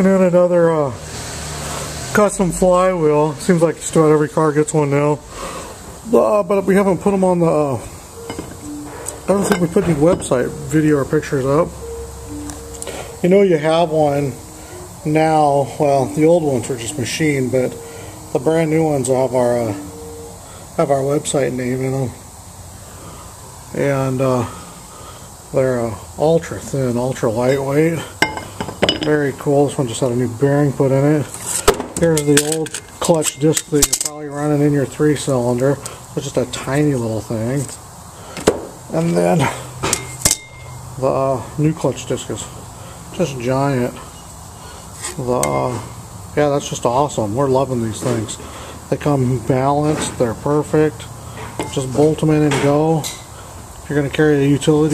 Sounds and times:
Speech: 0:00.0 - 0:01.0, 0:02.2 - 0:05.2, 0:06.1 - 0:07.9, 0:09.3 - 0:11.7, 0:13.2 - 0:14.4, 0:15.0 - 0:17.8, 0:18.4 - 0:19.8, 0:20.8 - 0:22.2, 0:23.7 - 0:24.5, 0:25.5 - 0:28.1, 0:29.0 - 0:31.3, 0:32.0 - 0:37.8, 0:38.9 - 0:39.6, 0:41.0 - 0:42.5, 0:43.2 - 0:44.0, 0:45.1 - 0:51.1, 0:51.7 - 0:53.1, 0:53.9 - 0:54.9.

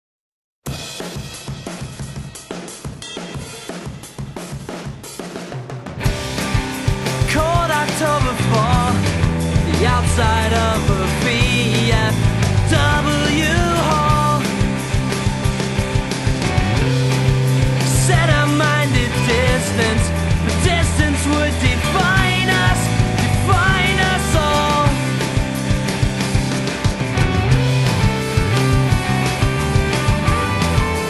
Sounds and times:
Drum kit: 0:00.6 - 0:31.0
Bass drum: 0:05.9 - 0:31.0.

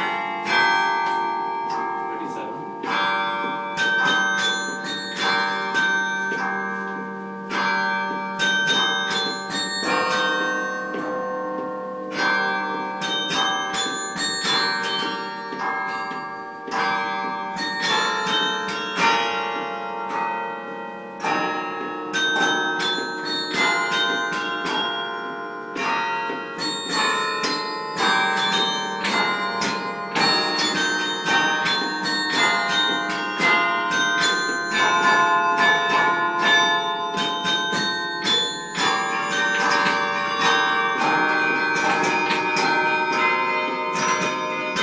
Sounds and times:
Bell: 0:00.0 - 0:44.8.

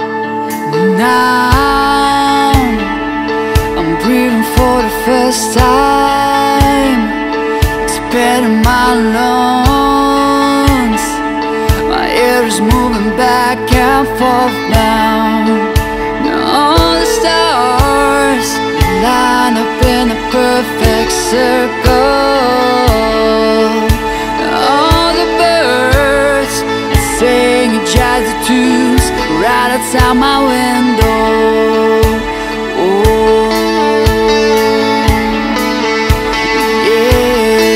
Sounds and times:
Music: 0:00.0 - 0:37.7.

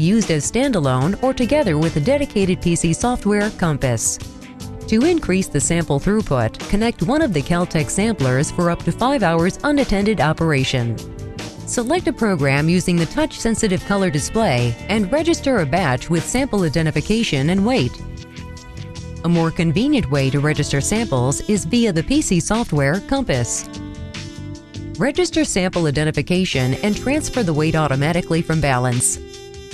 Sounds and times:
Speech: 0:00.0 - 0:04.2, 0:04.9 - 0:11.0, 0:11.7 - 0:18.0, 0:19.3 - 0:23.7, 0:25.0 - 0:29.2
Music: 0:00.0 - 0:29.7.

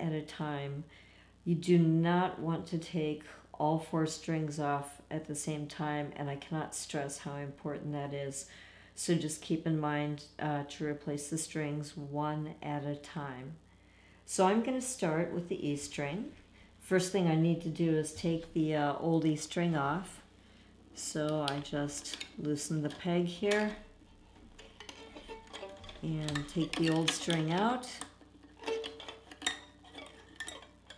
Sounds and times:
Speech: 0:00.0 - 0:13.6, 0:14.3 - 0:20.3, 0:21.0 - 0:23.9, 0:26.0 - 0:28.1.

